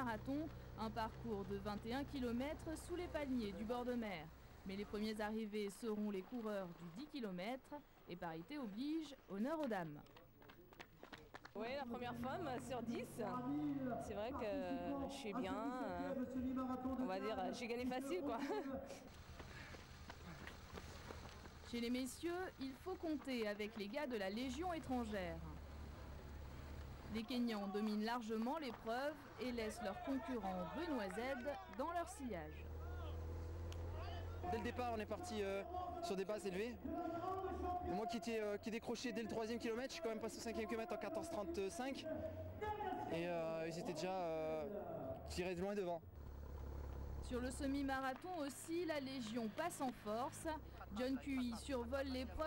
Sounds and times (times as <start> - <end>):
Run: 5.0 - 12.8, 15.9 - 25.8, 26.4 - 32.9, 46.2 - 51.1
Speech: 11.6 - 19.0, 34.0 - 46.0.